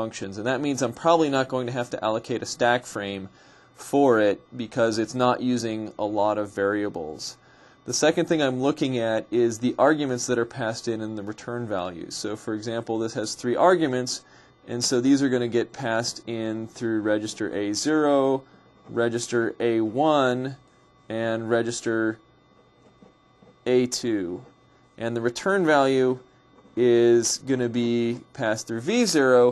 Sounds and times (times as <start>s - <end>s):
Speech: 0.0s - 22.2s, 23.6s - 29.5s.